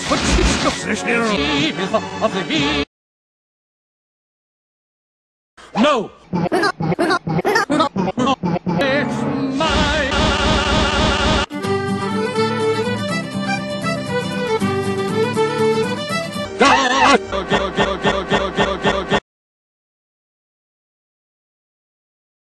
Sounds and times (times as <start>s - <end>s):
Music: 0.1s - 2.9s, 8.8s - 19.2s
Male singing: 9.6s - 11.4s.